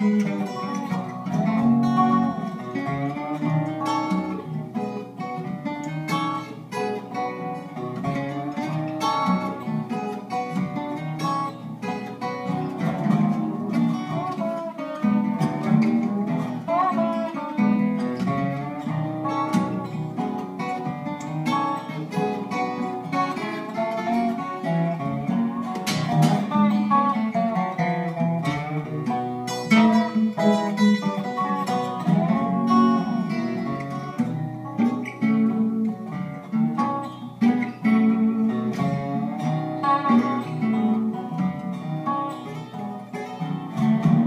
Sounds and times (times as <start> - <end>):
Strum: 0.0 - 44.2.